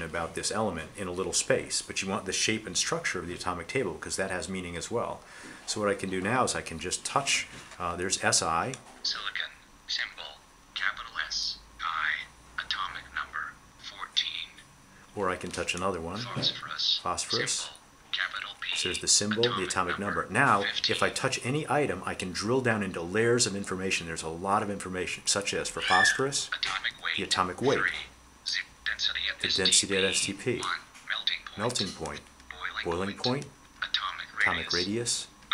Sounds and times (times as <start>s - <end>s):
Speech: 0.0s - 14.6s, 15.2s - 35.5s.